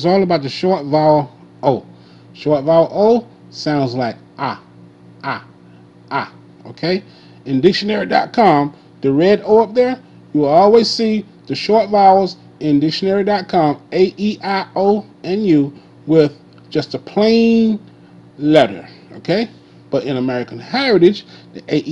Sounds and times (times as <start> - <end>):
Speech: 0.0 - 5.5, 6.1 - 17.8, 18.4 - 21.9.